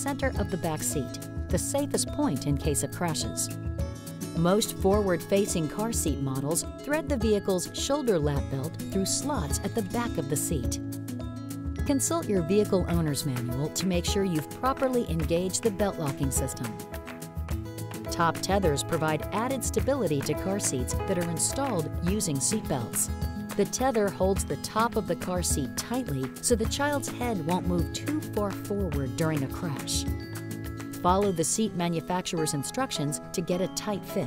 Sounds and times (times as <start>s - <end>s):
Speech: 0.0s - 3.5s, 4.4s - 10.8s, 11.8s - 16.8s, 18.1s - 30.1s, 31.0s - 34.2s
Music: 0.0s - 34.2s.